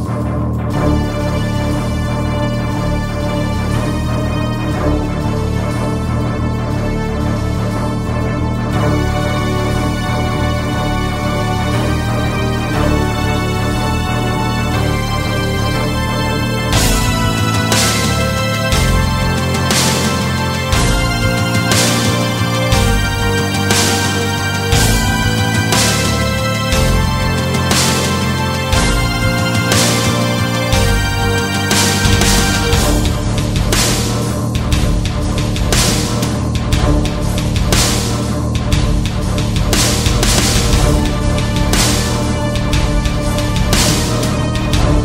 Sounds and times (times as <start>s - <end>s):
Music: 0.0s - 45.0s.